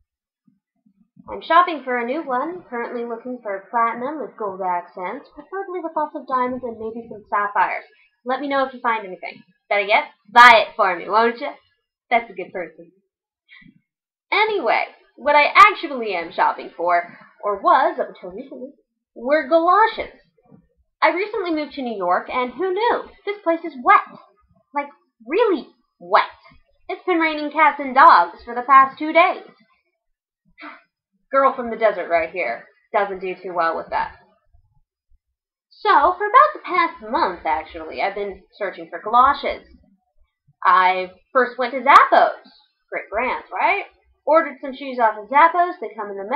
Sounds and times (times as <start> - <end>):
Speech: 1.3 - 12.8, 14.3 - 20.1, 21.0 - 24.2, 25.3 - 29.5, 31.4 - 34.2, 35.8 - 39.6, 40.6 - 46.3.